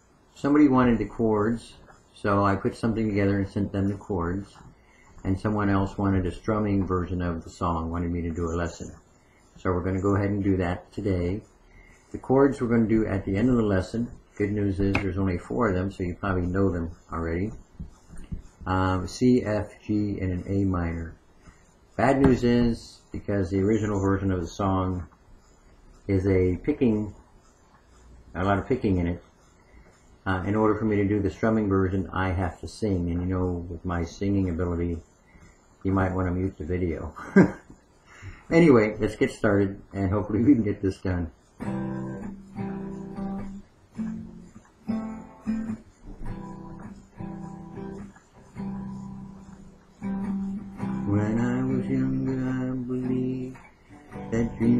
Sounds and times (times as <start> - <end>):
Speech: 0.4 - 9.0, 9.6 - 11.5, 12.1 - 17.7, 18.6 - 21.2, 22.0 - 25.1, 26.0 - 27.2, 28.3 - 29.2, 30.2 - 35.1, 35.8 - 37.6, 38.5 - 41.4, 51.0 - 53.7, 54.3 - 54.7.